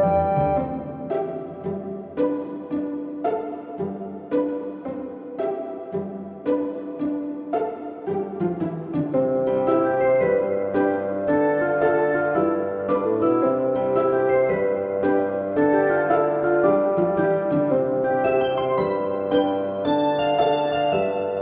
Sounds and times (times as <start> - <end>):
Glockenspiel: 9.2 - 21.4.